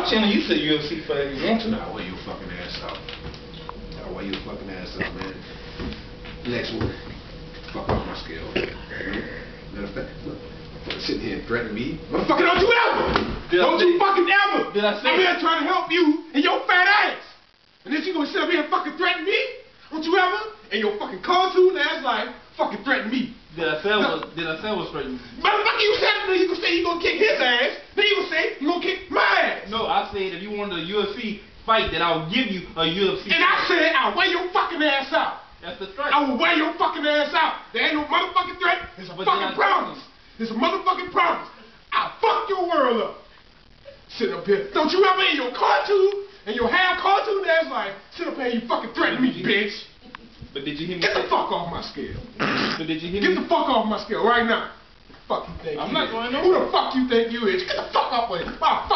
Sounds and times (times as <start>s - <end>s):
Speech: 0.0s - 3.0s, 4.0s - 5.4s, 6.4s - 7.0s, 7.7s - 43.3s, 44.1s - 58.9s.